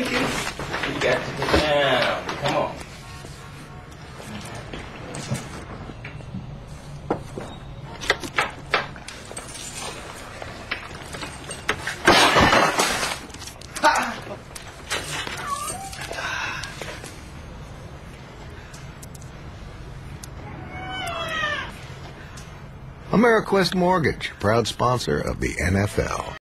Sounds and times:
Meow: 0:15.4 - 0:16.1, 0:20.4 - 0:21.8
Speech: 0:23.1 - 0:26.4.

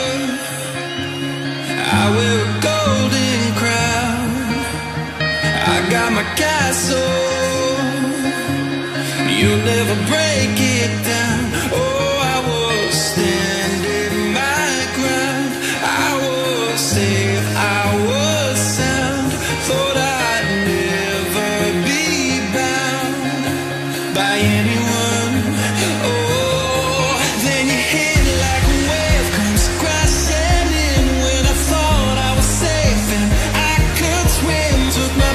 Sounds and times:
Pop music: 0:00.0 - 0:35.3.

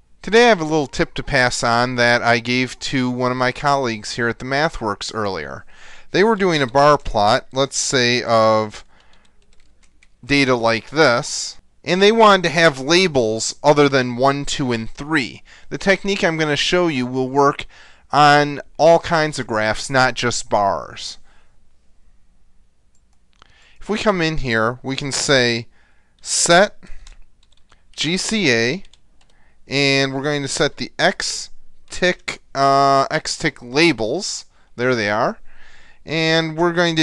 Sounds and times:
Speech: 0:00.2 - 0:08.9, 0:10.2 - 0:21.2, 0:23.8 - 0:26.9, 0:28.0 - 0:28.9, 0:29.7 - 0:35.4, 0:36.1 - 0:37.0.

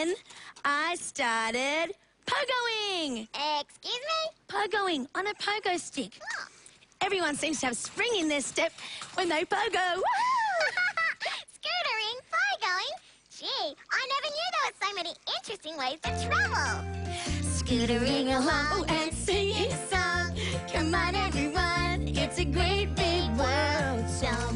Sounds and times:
Speech: 0:00.0 - 0:10.4, 0:11.6 - 0:16.8
Music for children: 0:16.0 - 0:24.5.

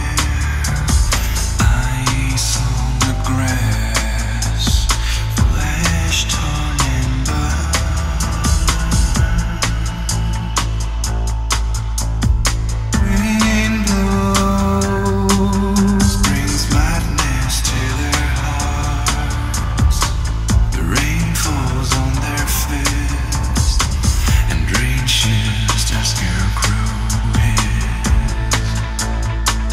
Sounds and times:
Music: 0:00.0 - 0:29.7.

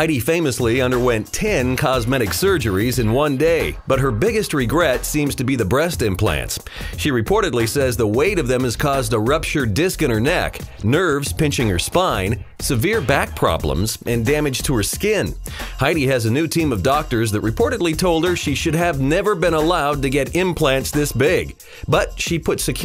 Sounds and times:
Music: 0:00.0 - 0:22.8
Speech: 0:00.0 - 0:22.8.

